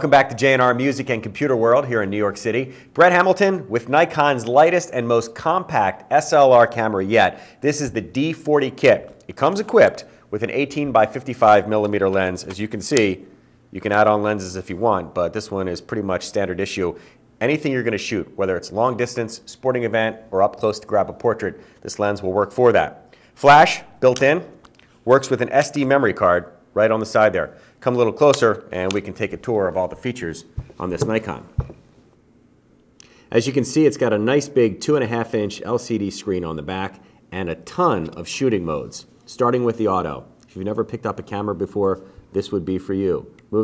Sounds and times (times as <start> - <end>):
Speech: 0.0 - 31.7, 33.3 - 43.6.